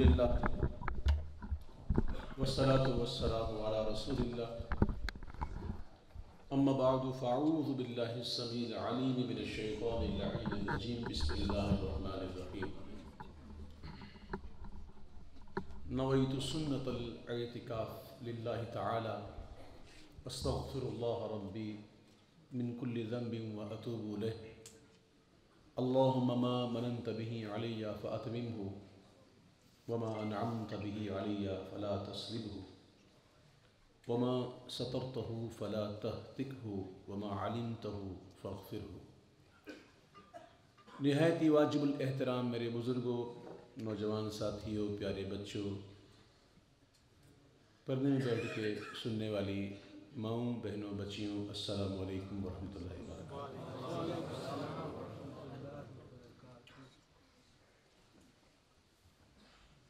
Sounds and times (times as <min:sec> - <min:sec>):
Male speech, man speaking: 0:00.0 - 0:00.7, 0:02.2 - 0:04.7, 0:06.5 - 0:13.1, 0:15.9 - 0:24.6, 0:25.8 - 0:29.0, 0:29.9 - 0:32.8, 0:34.1 - 0:39.1, 0:40.9 - 0:46.0, 0:47.9 - 0:57.0
Narration, monologue: 0:00.0 - 0:57.2.